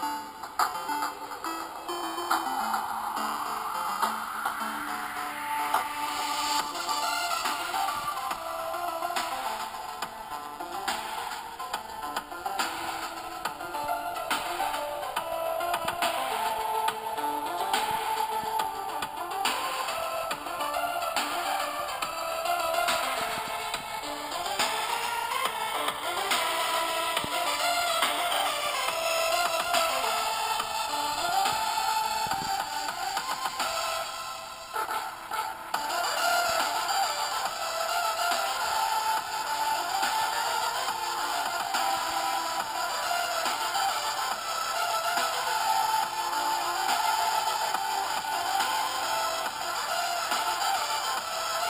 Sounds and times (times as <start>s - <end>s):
Electronic music: 0.0s - 51.7s.